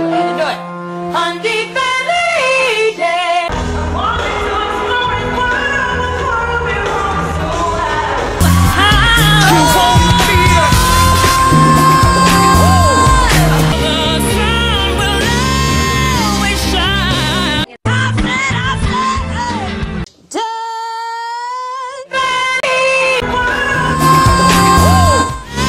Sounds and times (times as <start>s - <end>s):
Pop music: 0.0s - 20.5s, 22.0s - 25.6s
Singing: 1.4s - 19.7s, 20.3s - 25.6s
Rock music: 3.5s - 20.1s, 23.2s - 25.6s
Song: 8.4s - 16.4s, 23.2s - 25.6s.